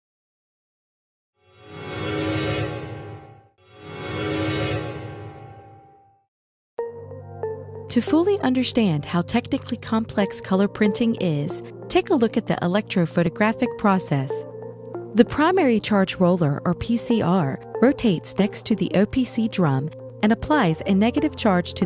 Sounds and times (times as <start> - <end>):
Music: 1.4 - 21.8
Speech: 7.9 - 14.4, 15.2 - 21.8.